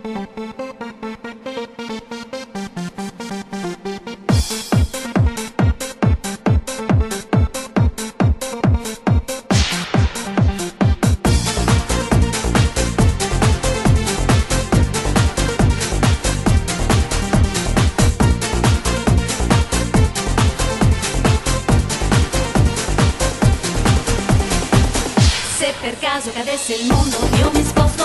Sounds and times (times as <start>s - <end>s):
Electronic dance music: 0.0s - 28.0s.